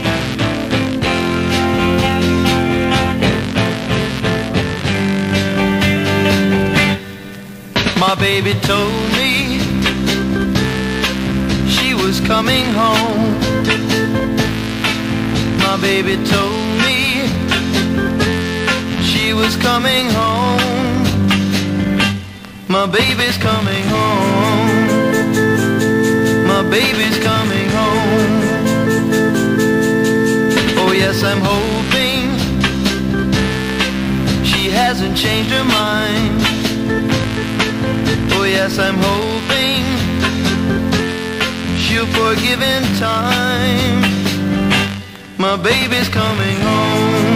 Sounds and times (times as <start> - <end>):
Psychedelic rock: 0.0 - 47.3.